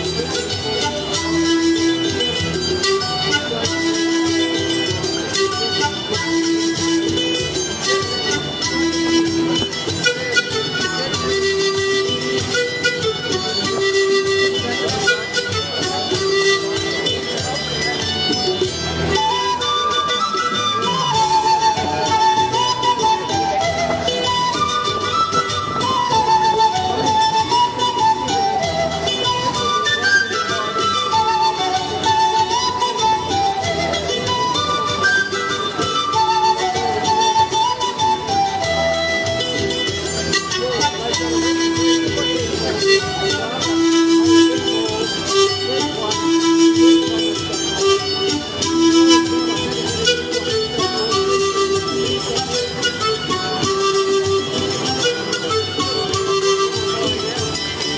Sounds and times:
Flute: 0:00.0 - 0:57.9.

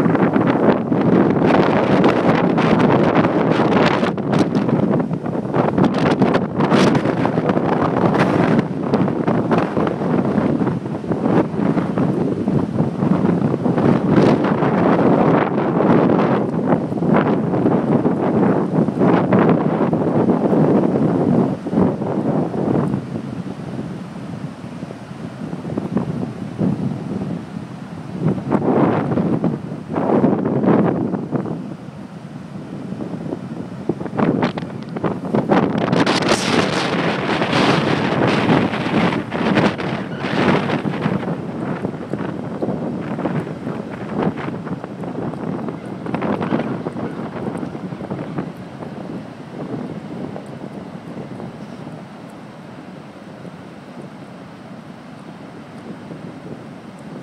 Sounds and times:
Waves, surf: 0:00.0 - 0:57.2
Wind noise (microphone): 0:00.0 - 0:57.2.

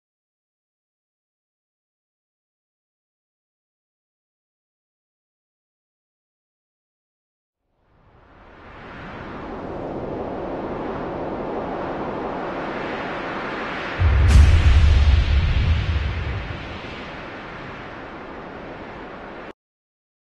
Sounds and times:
Thunder: 0:14.0 - 0:18.0.

